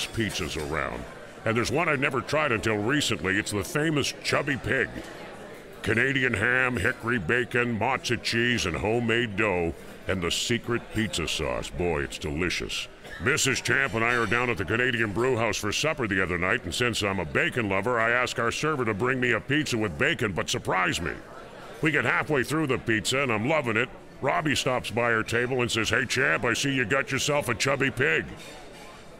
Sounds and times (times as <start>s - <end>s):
Speech: 0.0s - 29.1s.